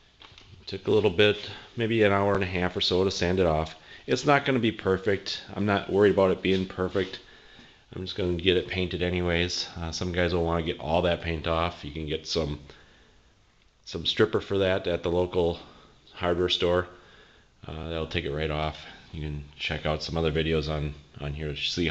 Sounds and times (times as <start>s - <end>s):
Speech: 0.6s - 7.3s, 7.9s - 12.8s, 13.8s - 17.0s, 17.6s - 21.9s.